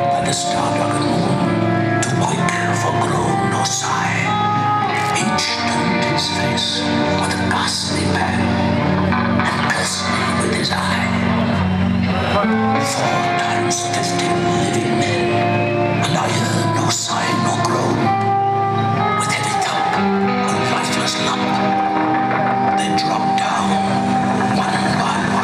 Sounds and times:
Male speech, man speaking: 0:00.0 - 0:01.4, 0:02.0 - 0:04.4, 0:05.0 - 0:08.6, 0:09.4 - 0:11.2, 0:12.8 - 0:15.4, 0:16.0 - 0:18.1, 0:19.2 - 0:21.8, 0:22.8 - 0:25.4
Music: 0:00.0 - 0:25.4.

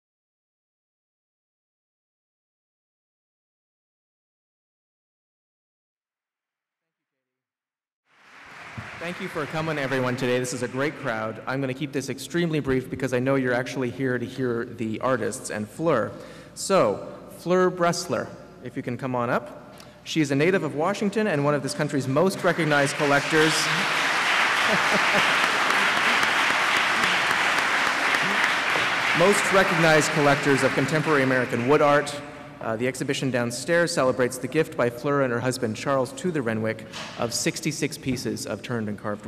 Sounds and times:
Speech: 0:09.0 - 0:19.5, 0:20.1 - 0:23.8, 0:29.2 - 0:39.2.

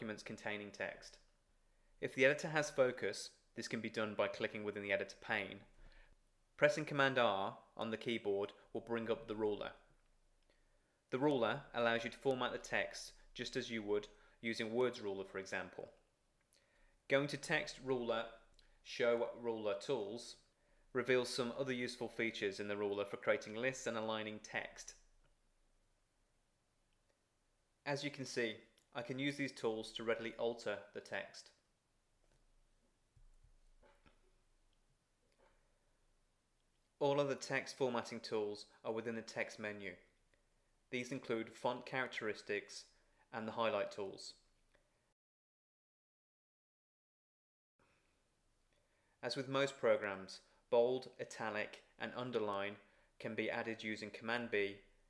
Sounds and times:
Speech: 0:00.0 - 0:01.2, 0:02.0 - 0:05.7, 0:06.6 - 0:09.9, 0:11.1 - 0:16.0, 0:17.1 - 0:25.0, 0:27.8 - 0:31.6, 0:37.0 - 0:40.1, 0:40.9 - 0:44.4, 0:49.2 - 0:54.9.

